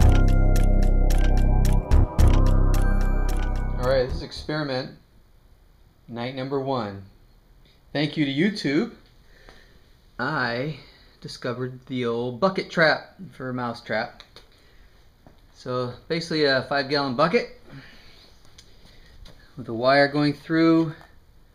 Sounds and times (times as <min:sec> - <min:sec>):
Speech: 0:03.8 - 0:05.0, 0:06.1 - 0:07.1, 0:07.9 - 0:09.0, 0:10.2 - 0:14.2, 0:15.6 - 0:17.6, 0:19.6 - 0:21.1.